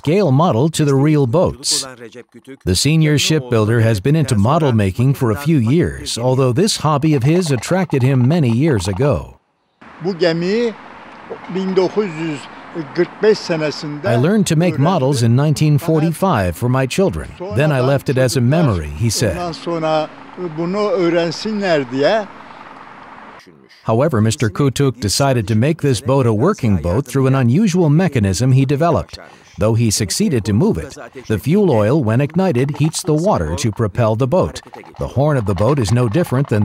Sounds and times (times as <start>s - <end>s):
Speech: 0.0s - 9.3s, 10.0s - 22.3s, 23.4s - 36.6s.